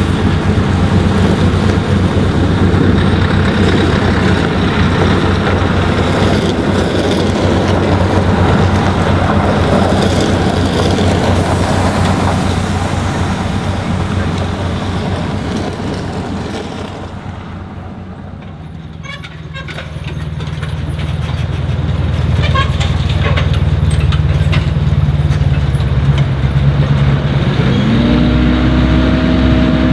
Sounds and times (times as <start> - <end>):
Truck: 0.0 - 29.9.